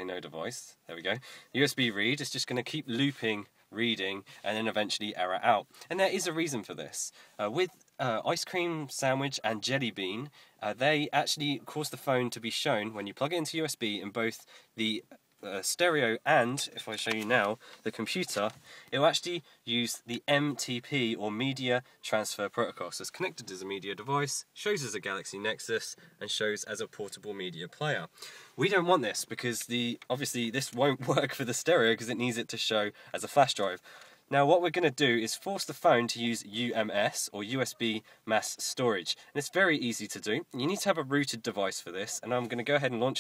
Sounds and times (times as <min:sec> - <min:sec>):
Speech: 0:00.0 - 0:43.2.